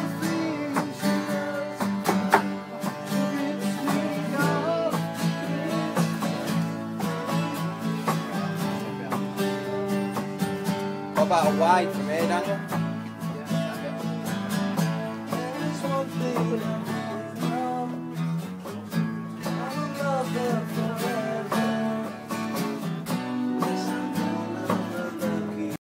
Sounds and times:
Music: 0.0s - 25.8s.

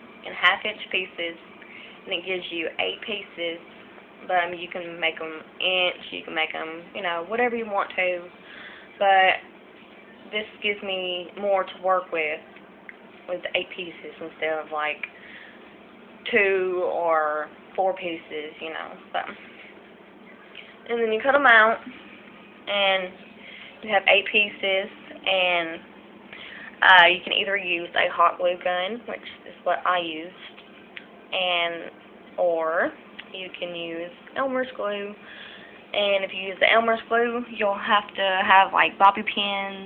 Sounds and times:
Speech: 0.3s - 1.4s, 2.1s - 8.3s, 9.0s - 9.5s, 10.3s - 12.5s, 13.3s - 15.1s, 16.2s - 19.4s, 20.8s - 22.0s, 22.7s - 23.2s, 23.8s - 25.9s, 26.7s - 30.6s, 31.3s - 35.2s, 35.9s - 39.8s.

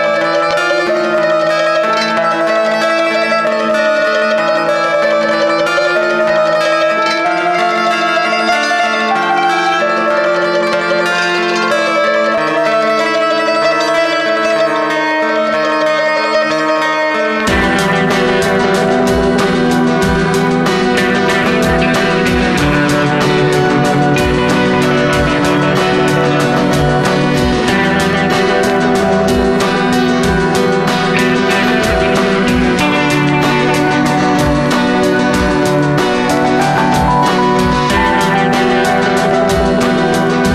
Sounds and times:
Music: 0.0s - 40.5s.

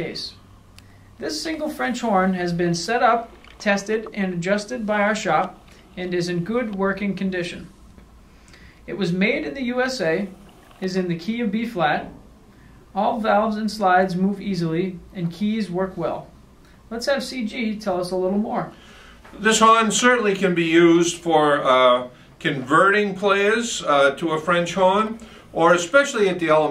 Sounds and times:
Speech: 0.0s - 0.4s, 1.2s - 7.8s, 8.9s - 12.2s, 13.0s - 16.3s, 16.9s - 26.7s.

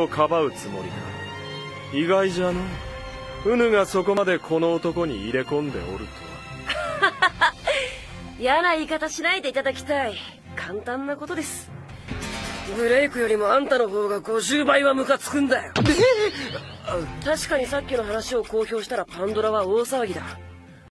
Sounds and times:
Music: 0.0s - 20.9s
Speech: 16.9s - 20.4s.

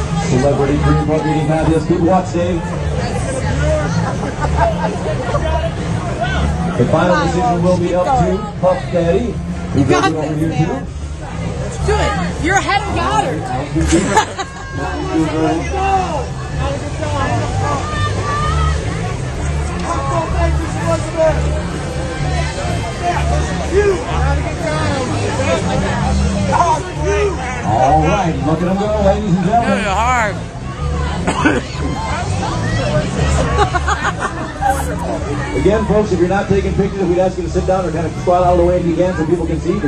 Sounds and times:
Hubbub, speech noise, speech babble: 0.0s - 39.8s
Music: 0.0s - 39.8s.

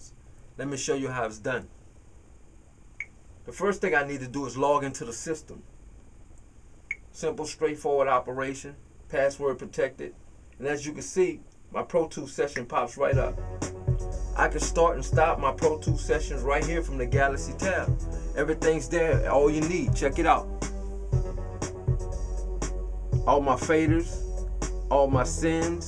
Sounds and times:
Speech: 0.0s - 1.7s, 3.4s - 5.7s, 7.1s - 13.4s, 14.4s - 20.5s, 23.2s - 24.2s, 24.9s - 25.8s
Music: 13.1s - 25.8s.

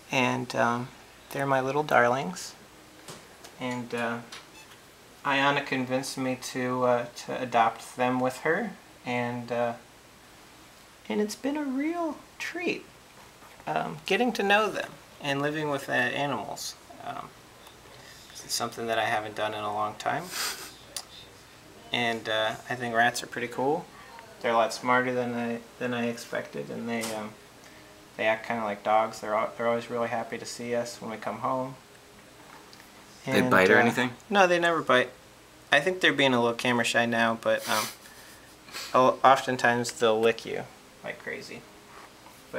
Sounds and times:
Speech: 0.1s - 2.6s, 3.6s - 4.3s, 5.2s - 9.8s, 11.1s - 12.9s, 13.6s - 17.4s, 18.4s - 27.4s, 28.2s - 31.8s, 33.2s - 37.9s, 39.0s - 41.7s.

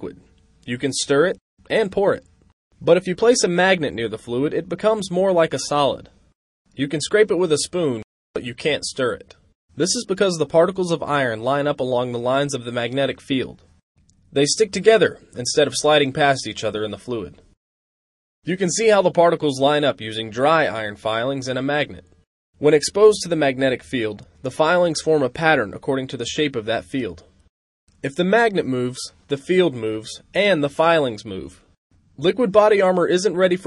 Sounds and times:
Speech: 0.0s - 6.2s, 6.8s - 13.7s, 14.3s - 17.5s, 18.4s - 27.4s, 28.0s - 33.6s.

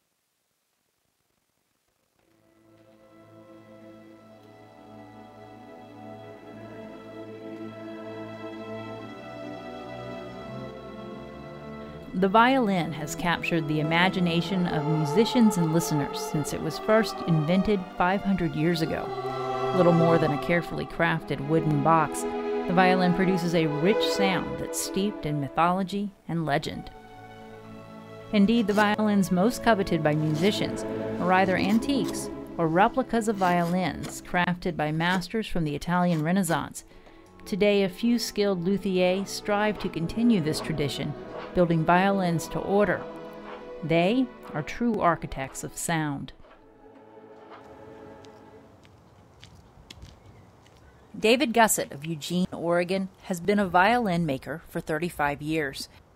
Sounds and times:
Music: 2.2s - 48.9s
Speech: 12.1s - 19.1s, 19.8s - 26.9s, 28.4s - 36.8s, 37.5s - 43.0s, 43.8s - 46.4s, 51.2s - 55.9s.

